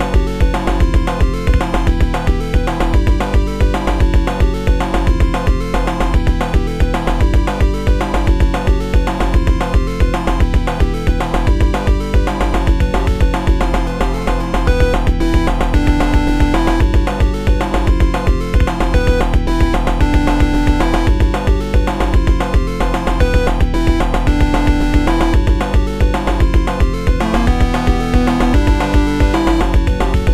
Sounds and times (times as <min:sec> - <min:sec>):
Theme music: 0:13.9 - 0:30.3.